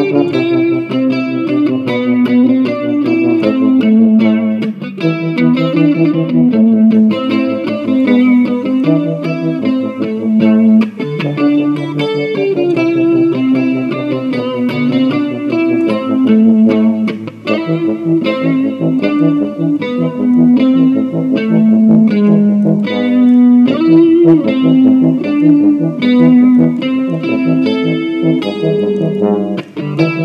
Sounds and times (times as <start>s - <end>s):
Electric guitar: 0.0s - 30.2s.